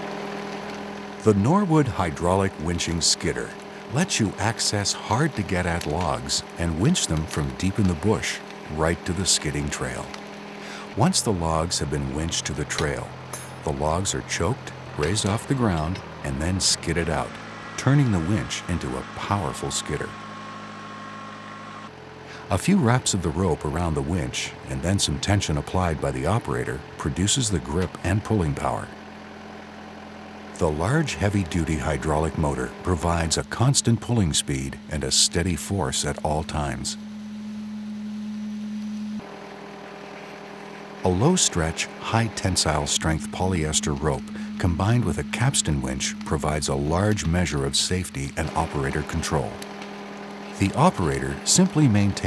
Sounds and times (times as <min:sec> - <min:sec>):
Vehicle: 0:00.0 - 0:52.2
Speech: 0:01.2 - 0:10.2, 0:10.8 - 0:13.1, 0:13.7 - 0:20.1, 0:22.3 - 0:29.0, 0:30.6 - 0:37.0, 0:41.0 - 0:49.6, 0:50.6 - 0:52.2.